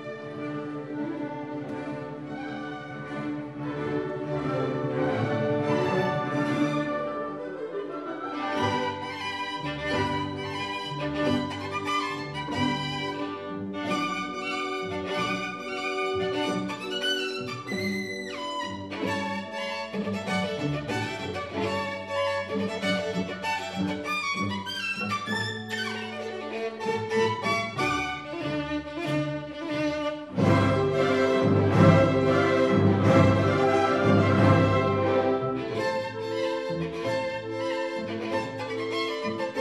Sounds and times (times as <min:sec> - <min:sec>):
Violin, fiddle: 0:00.0 - 0:39.6.